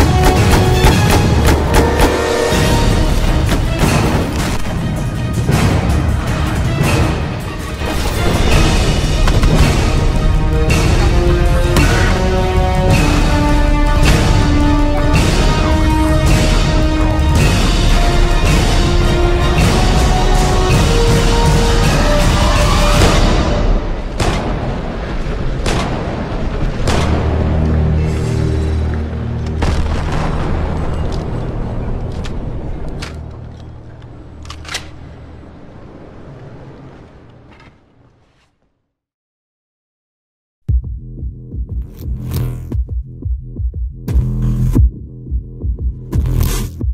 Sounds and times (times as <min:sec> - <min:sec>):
Music: 0:00.0 - 0:25.0, 0:25.6 - 0:35.0, 0:40.6 - 0:46.9.